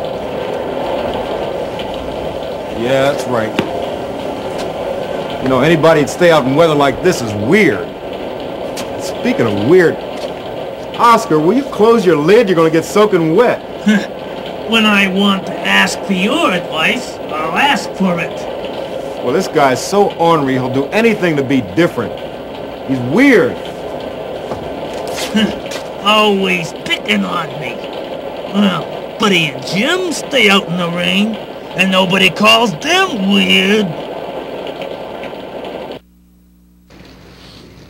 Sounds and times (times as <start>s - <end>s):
Rain on surface: 0.0s - 36.0s, 36.9s - 37.9s.